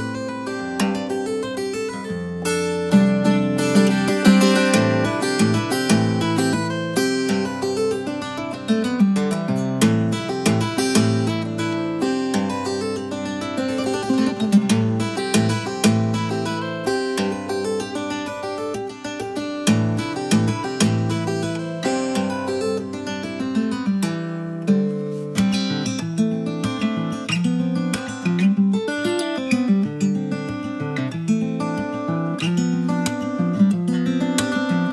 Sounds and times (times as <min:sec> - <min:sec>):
Acoustic guitar: 0:00.0 - 0:34.9.